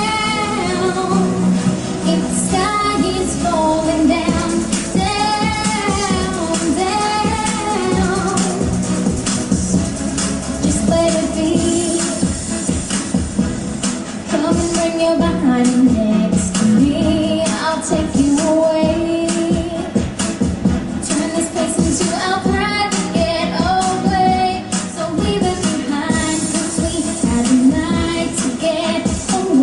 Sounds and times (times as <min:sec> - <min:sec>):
Music: 0:00.0 - 0:29.6.